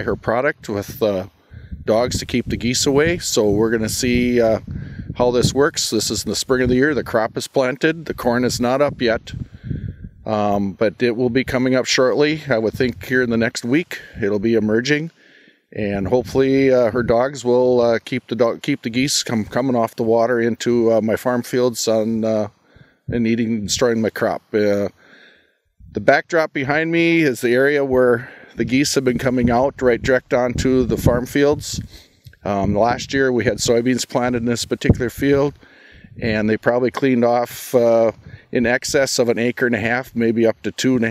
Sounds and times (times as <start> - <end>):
Speech: 0.0 - 1.3, 1.9 - 9.4, 10.2 - 15.1, 15.8 - 25.0, 25.9 - 35.6, 36.2 - 41.1.